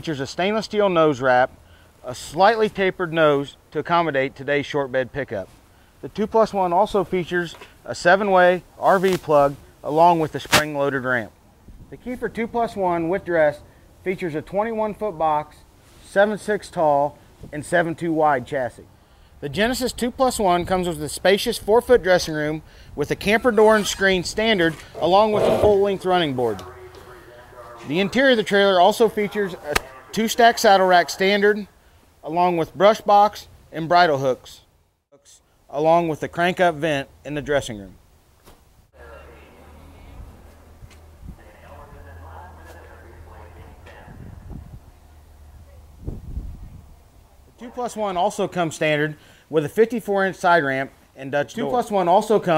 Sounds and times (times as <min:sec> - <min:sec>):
Speech: 0:00.0 - 0:38.0, 0:39.0 - 0:40.4, 0:41.4 - 0:44.7, 0:47.5 - 0:52.5.